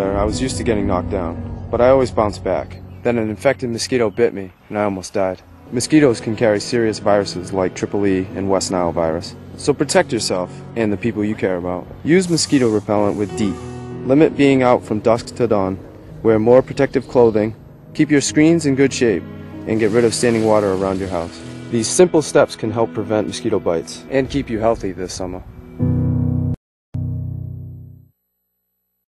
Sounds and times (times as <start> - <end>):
Speech: 0.0 - 25.4
Music: 0.0 - 28.1.